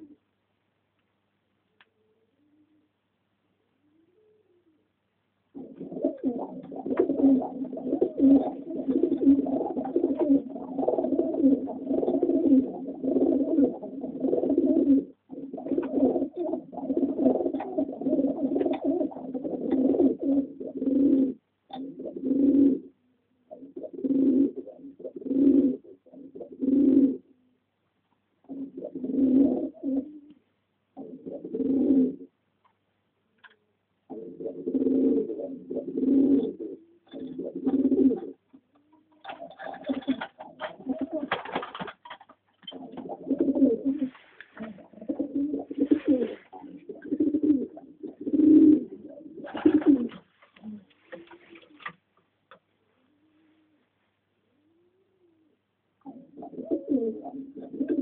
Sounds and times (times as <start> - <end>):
Inside, small room: 0.0 - 58.0
Pigeon, dove: 3.8 - 4.9, 5.6 - 27.6, 28.4 - 30.4, 31.0 - 32.3, 33.4 - 53.9, 54.5 - 58.0.